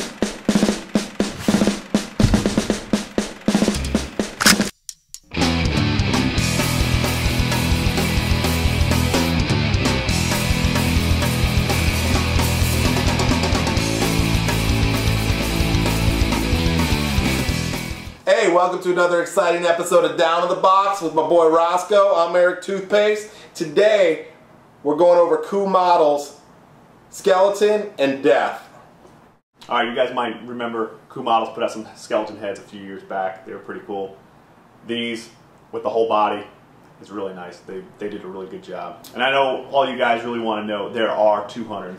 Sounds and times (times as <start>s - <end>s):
Speech: 18.2s - 26.4s, 27.1s - 28.7s, 29.6s - 34.2s, 34.8s - 41.9s.